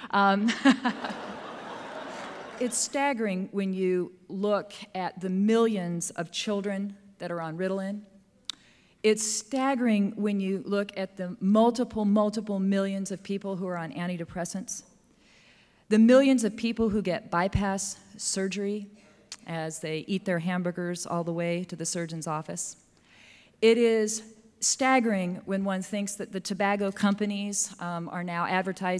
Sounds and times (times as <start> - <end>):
Speech: 0.1 - 0.6, 2.6 - 8.0, 15.9 - 22.8, 23.6 - 28.9.